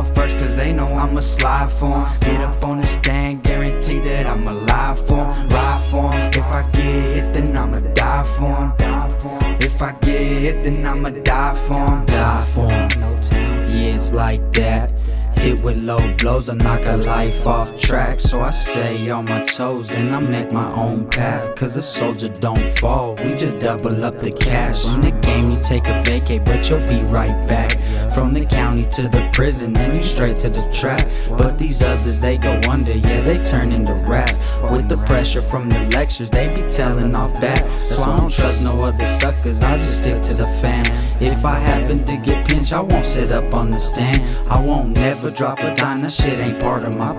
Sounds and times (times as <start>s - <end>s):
Rhythm and blues: 0.0s - 47.1s.